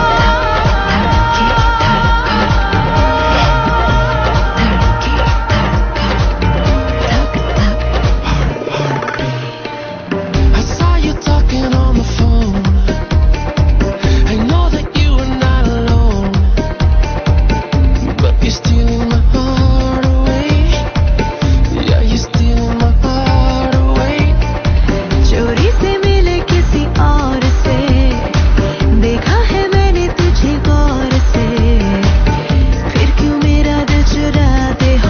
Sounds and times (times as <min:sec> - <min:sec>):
Music: 0:00.0 - 0:35.0.